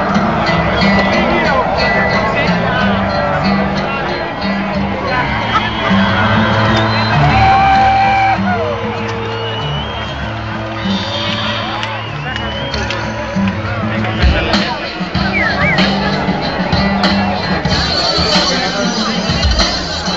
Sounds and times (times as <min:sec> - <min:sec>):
Music: 0:00.0 - 0:20.1
Speech: 0:11.6 - 0:20.1.